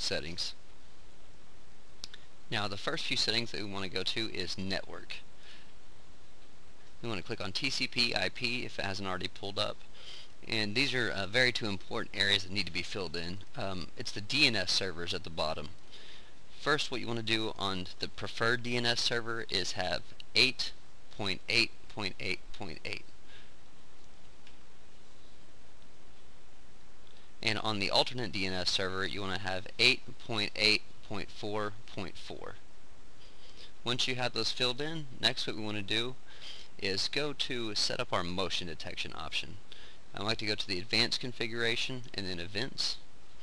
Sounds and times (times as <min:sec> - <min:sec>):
Speech: 0:00.0 - 0:00.6, 0:02.5 - 0:05.3, 0:07.0 - 0:15.8, 0:16.6 - 0:23.1, 0:27.4 - 0:32.7, 0:33.8 - 0:36.2, 0:36.8 - 0:43.1.